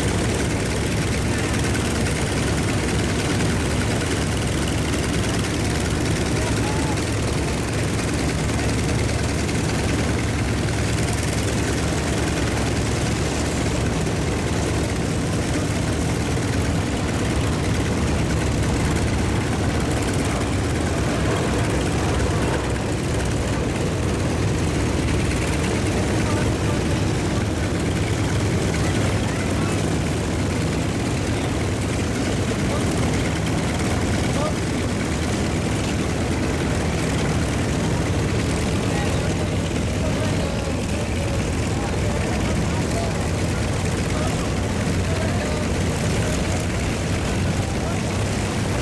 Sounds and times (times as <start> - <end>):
Fixed-wing aircraft, airplane: 0.0 - 48.8
Speech: 5.7 - 7.8, 25.7 - 35.2, 38.6 - 48.7.